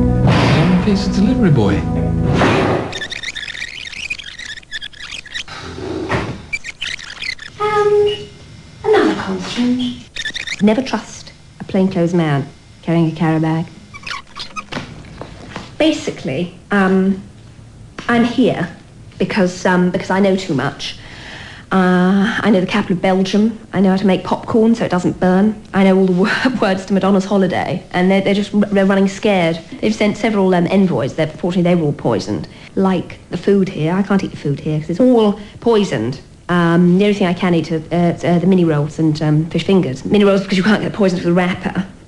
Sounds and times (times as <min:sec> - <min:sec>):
Music: 0:00.0 - 0:02.8
Inside, small room: 0:00.0 - 0:42.0
Speech: 0:00.6 - 0:02.0, 0:07.6 - 0:13.8, 0:15.8 - 0:17.3, 0:18.0 - 0:21.0, 0:21.7 - 0:42.0.